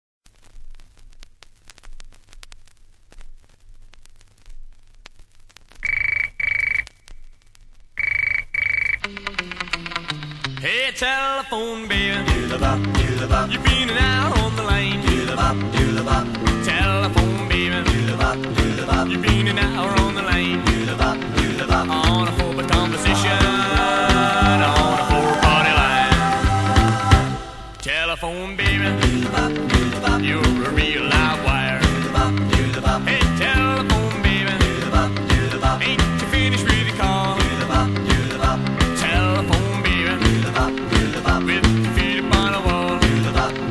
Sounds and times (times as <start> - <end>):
Music: 9.0 - 43.7.